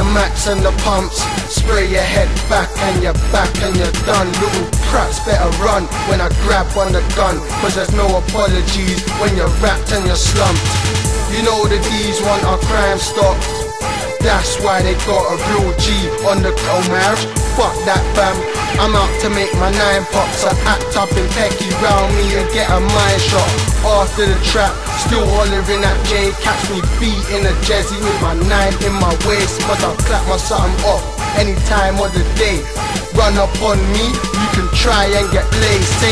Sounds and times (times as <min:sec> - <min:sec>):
Music: 0:00.0 - 0:36.1.